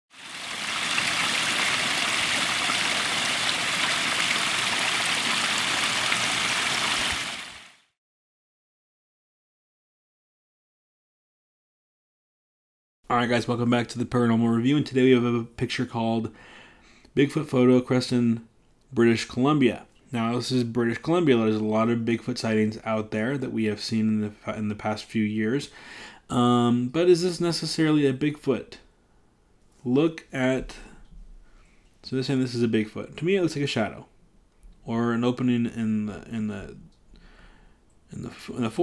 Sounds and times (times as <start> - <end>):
Rain: 0.1 - 7.9.